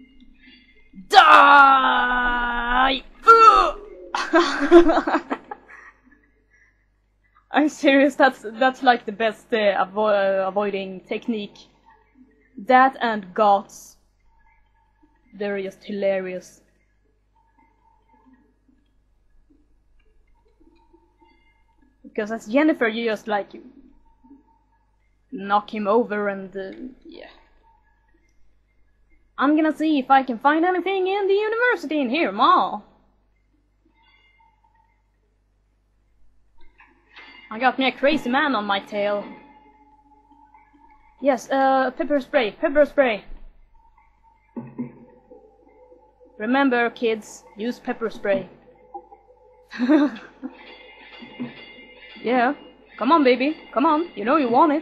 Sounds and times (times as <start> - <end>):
Speech: 1.0 - 5.6, 7.5 - 11.6, 12.6 - 13.9, 15.4 - 16.6, 22.1 - 23.7, 25.4 - 27.4, 29.4 - 32.9, 37.5 - 39.4, 41.2 - 43.4, 46.4 - 48.6, 52.2 - 54.8.